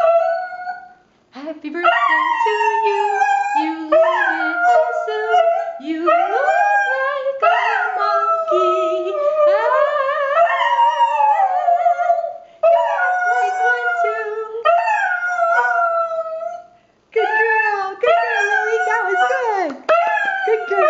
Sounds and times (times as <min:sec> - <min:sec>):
Inside, small room: 0:00.0 - 0:20.8
Speech: 0:01.4 - 0:01.9, 0:13.3 - 0:14.7, 0:17.2 - 0:20.8.